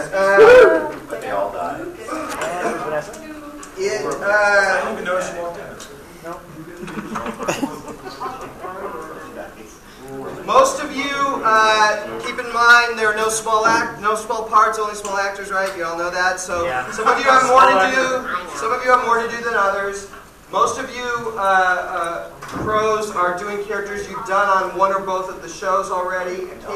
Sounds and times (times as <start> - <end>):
Speech: 7.7 - 26.7.